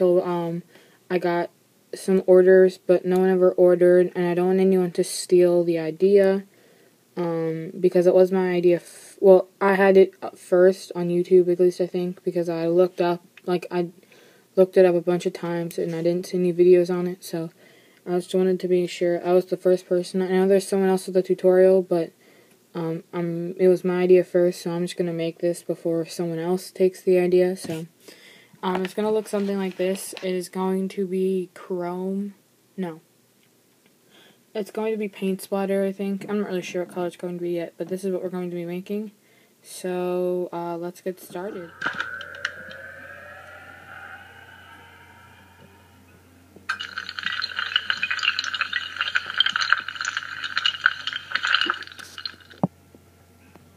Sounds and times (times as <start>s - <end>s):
Speech: 0.0s - 6.5s, 7.2s - 14.0s, 14.6s - 22.1s, 22.8s - 27.9s, 28.6s - 33.0s, 34.6s - 42.0s.